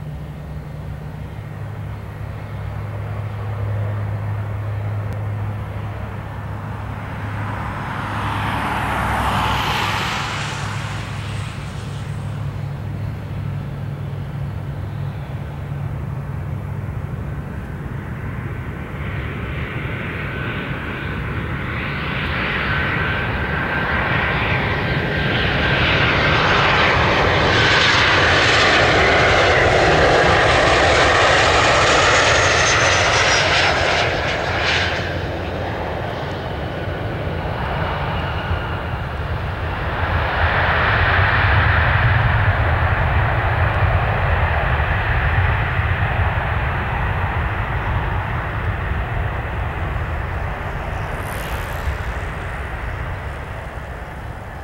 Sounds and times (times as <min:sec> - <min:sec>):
Aircraft engine: 0:00.0 - 0:54.6
Outside, rural or natural: 0:00.0 - 0:54.6.